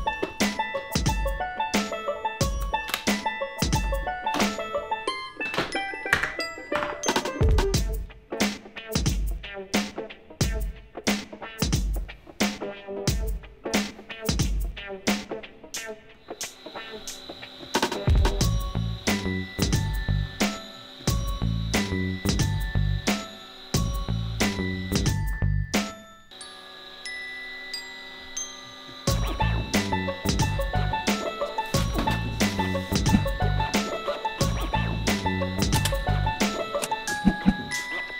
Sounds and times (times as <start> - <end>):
Music: 0.0 - 38.1.